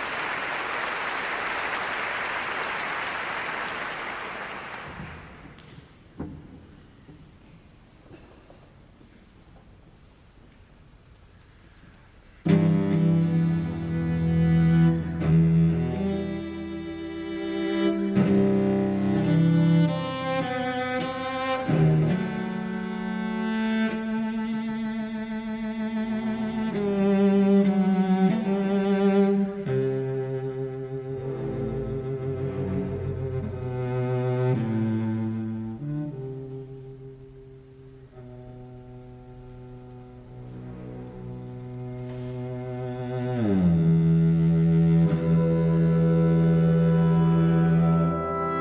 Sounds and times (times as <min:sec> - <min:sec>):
Cello: 0:00.0 - 0:48.6
Violin, fiddle: 0:11.8 - 0:48.6
Double bass: 0:12.4 - 0:48.6.